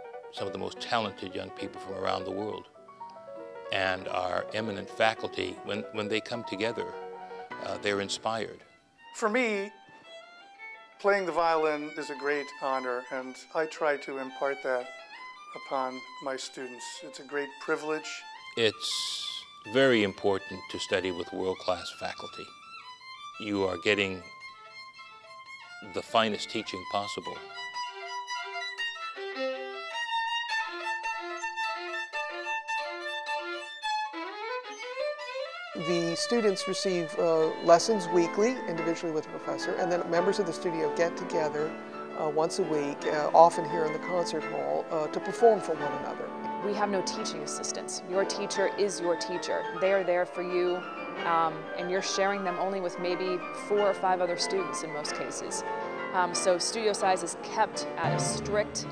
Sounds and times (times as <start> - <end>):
Music: 0.0 - 58.9
Speech: 0.4 - 2.7, 3.7 - 7.0, 7.6 - 8.6, 9.2 - 9.8, 11.0 - 14.9, 15.6 - 22.5, 23.4 - 24.2, 25.8 - 27.4, 35.8 - 55.6, 56.2 - 58.9.